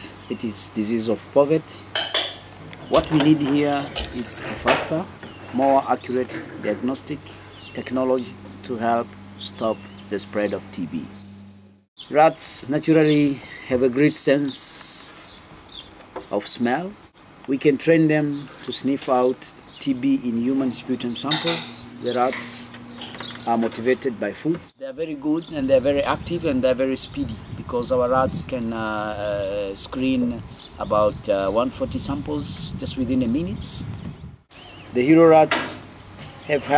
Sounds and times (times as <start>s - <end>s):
Speech: 0.0s - 1.9s, 2.9s - 11.1s, 12.1s - 15.1s, 16.3s - 22.7s, 23.4s - 33.9s, 34.9s - 35.8s, 36.4s - 36.7s.